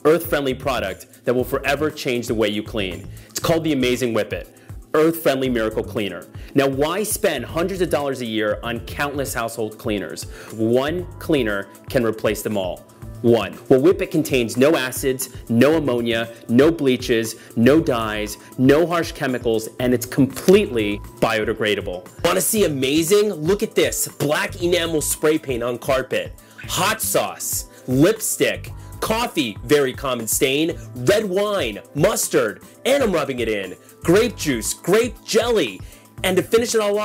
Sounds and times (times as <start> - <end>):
Music: 0.0 - 37.0
Speech: 0.0 - 37.0.